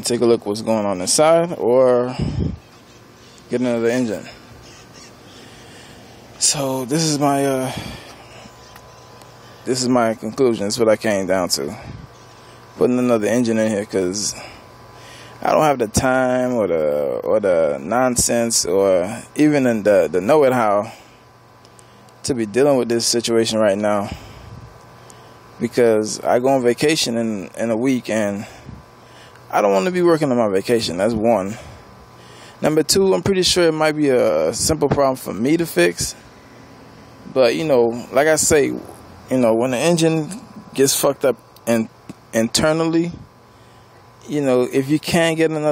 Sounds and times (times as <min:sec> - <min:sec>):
Speech: 0:00.0 - 0:02.3, 0:03.5 - 0:04.4, 0:06.4 - 0:07.9, 0:09.7 - 0:11.8, 0:12.8 - 0:14.4, 0:15.4 - 0:20.9, 0:22.2 - 0:24.2, 0:25.6 - 0:28.5, 0:29.5 - 0:31.7, 0:32.6 - 0:36.2, 0:37.3 - 0:43.3, 0:44.2 - 0:45.7.